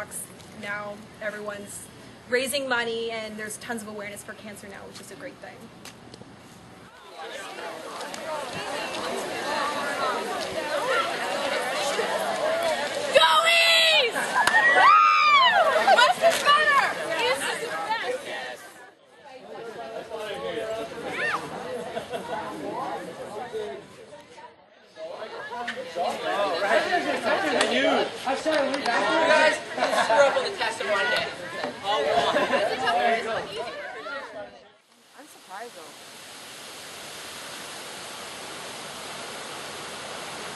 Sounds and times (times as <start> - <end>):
Chatter: 6.9 - 35.8.